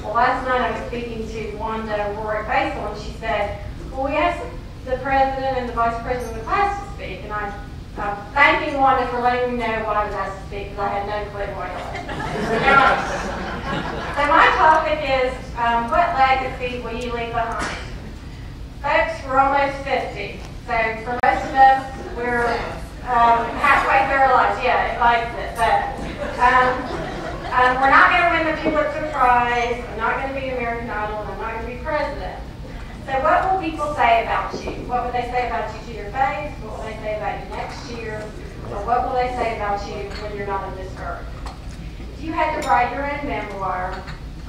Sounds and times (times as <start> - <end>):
Female speech, woman speaking: 0.0 - 13.2, 14.2 - 17.9, 18.8 - 41.3, 42.2 - 44.1
Narration, monologue: 0.0 - 44.4.